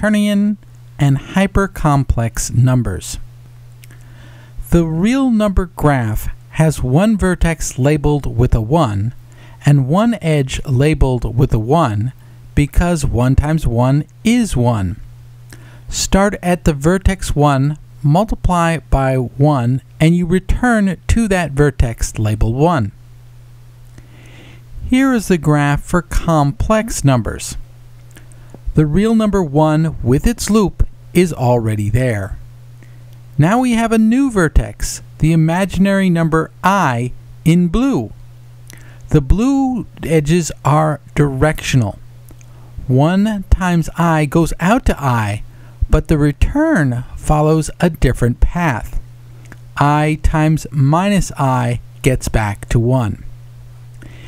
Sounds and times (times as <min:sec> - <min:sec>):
Speech: 0:00.0 - 0:03.3, 0:04.6 - 0:15.0, 0:15.9 - 0:23.0, 0:24.8 - 0:27.6, 0:28.8 - 0:32.4, 0:33.4 - 0:38.2, 0:39.1 - 0:42.0, 0:42.8 - 0:49.0, 0:49.8 - 0:53.3.